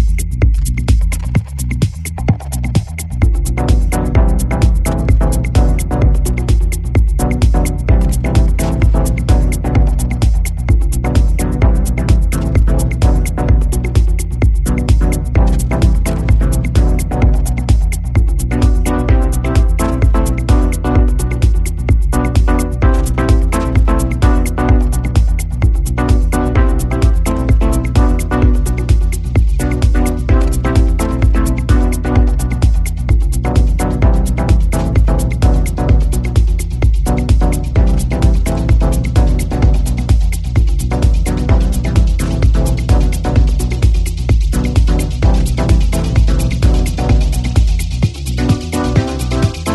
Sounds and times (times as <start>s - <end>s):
Music: 0.0s - 49.7s.